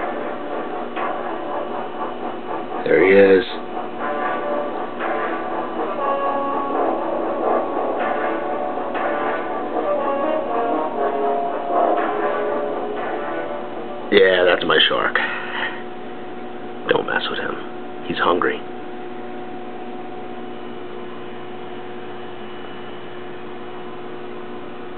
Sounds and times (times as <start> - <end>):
Music: 0.0 - 17.8.